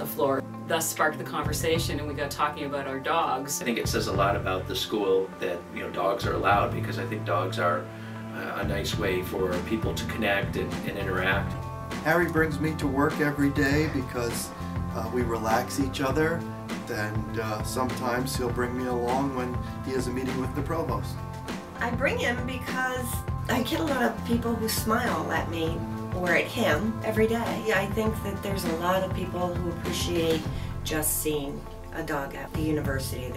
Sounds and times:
Music: 0.0s - 33.3s.

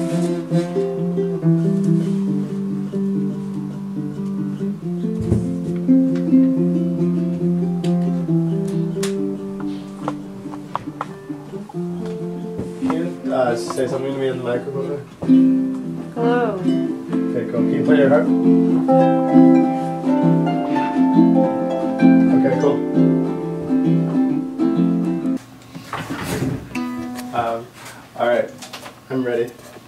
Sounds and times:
Music: 0.0s - 25.4s, 26.8s - 27.6s
Speech: 12.8s - 15.0s, 16.2s - 16.7s, 17.3s - 18.3s, 27.4s - 29.6s.

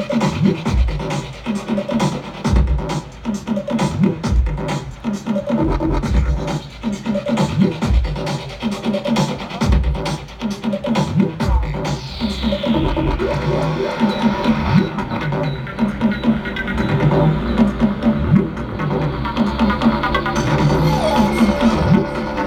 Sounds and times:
Music: 0.0s - 22.4s.

